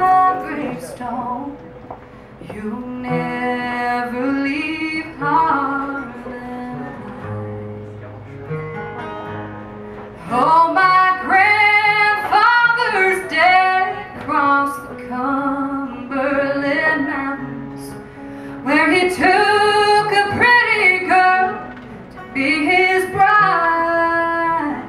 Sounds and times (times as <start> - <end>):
Music: 0.0 - 24.8.